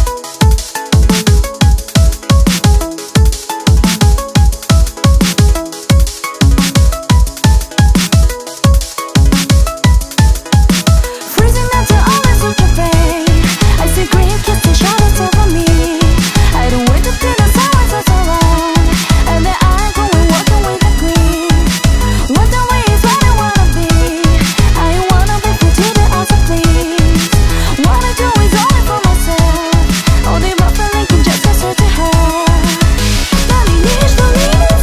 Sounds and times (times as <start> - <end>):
Music: 0.0 - 34.8.